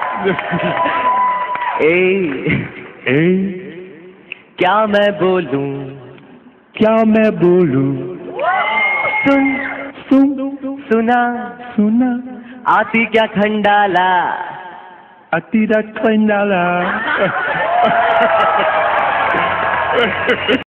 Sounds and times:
Male singing: 0:03.1 - 0:03.7, 0:04.6 - 0:06.2, 0:06.8 - 0:08.3, 0:09.2 - 0:14.8, 0:15.4 - 0:17.0.

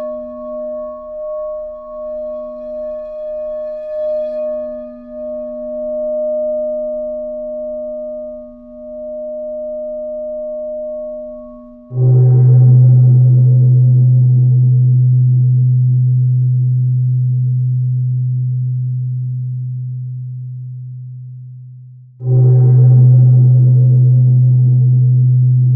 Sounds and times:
Singing bowl: 0:00.0 - 0:20.0, 0:22.2 - 0:25.7.

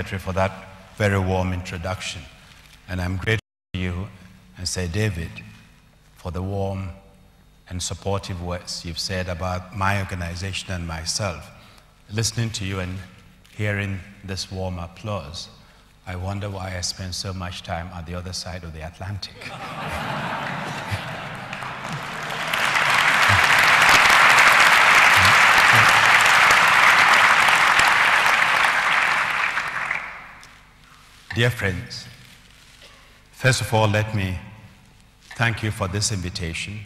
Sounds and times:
Male speech, man speaking: 0:00.0 - 0:02.3, 0:02.9 - 0:05.6, 0:06.2 - 0:07.1, 0:07.7 - 0:19.4, 0:31.3 - 0:32.2, 0:33.4 - 0:34.7, 0:35.3 - 0:36.8
Narration, monologue: 0:00.0 - 0:19.8, 0:30.4 - 0:36.8.

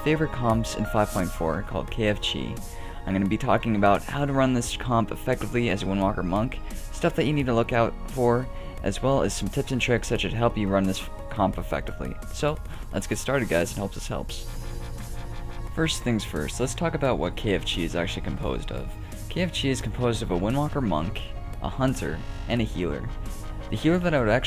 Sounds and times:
Speech: 0:00.0 - 0:14.4, 0:15.8 - 0:23.1, 0:23.7 - 0:24.4
Music: 0:00.0 - 0:24.4.

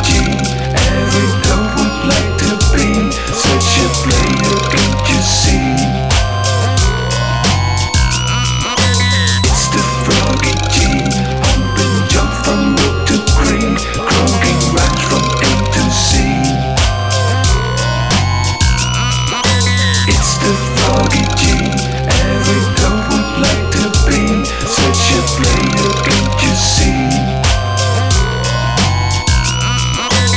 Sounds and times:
Soundtrack music: 0:00.0 - 0:30.3.

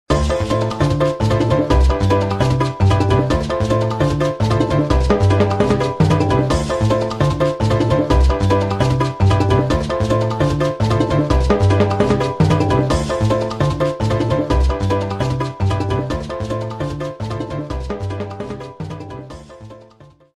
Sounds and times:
Theme music: 0:00.1 - 0:20.0.

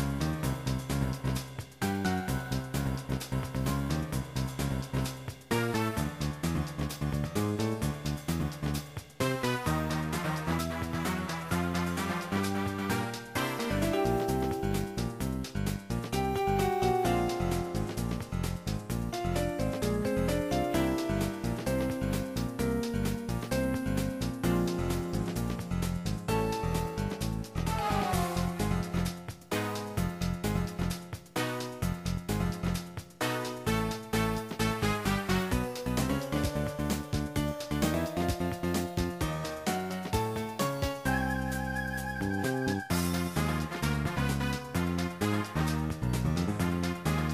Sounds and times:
Funny music: 0:00.0 - 0:47.3.

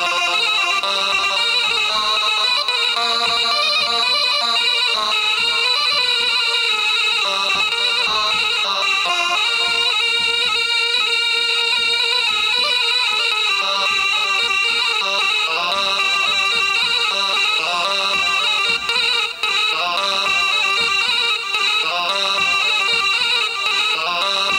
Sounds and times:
Music: 0:00.0 - 0:24.5.

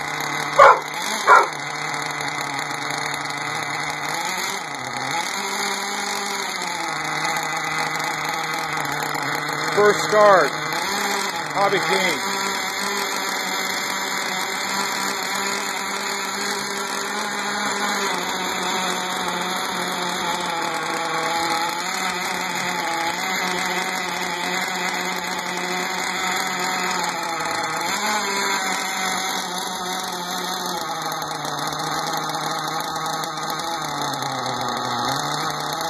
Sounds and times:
Idling: 0:00.0 - 0:35.9.

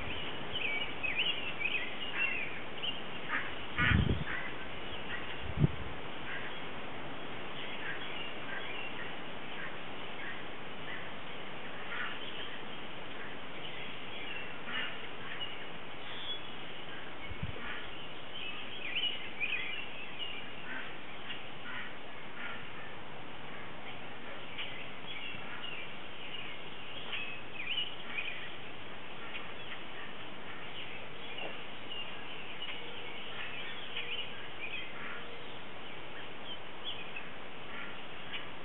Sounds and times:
Wind noise (microphone): 0:03.8 - 0:04.5, 0:05.4 - 0:06.1, 0:17.2 - 0:17.7.

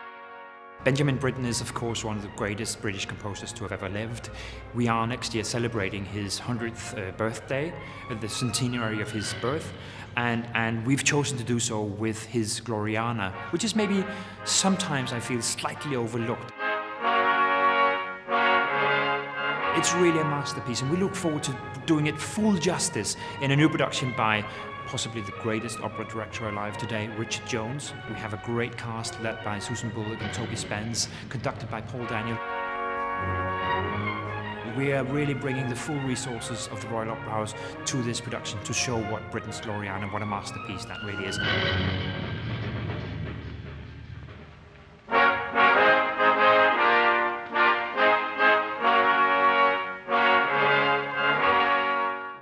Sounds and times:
Speech: 0:00.8 - 0:16.5, 0:19.8 - 0:32.4, 0:33.8 - 0:41.5
Opera: 0:00.8 - 0:43.1.

